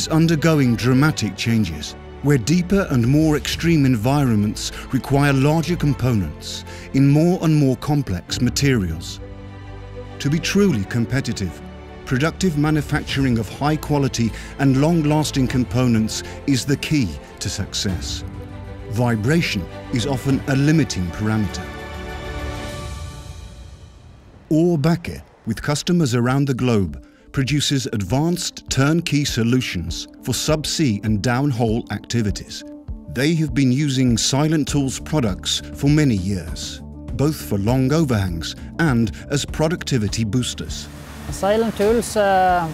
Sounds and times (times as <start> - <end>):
Speech: 0.0 - 9.2, 10.2 - 18.2, 18.9 - 21.7, 24.5 - 42.7
Music: 0.0 - 42.7.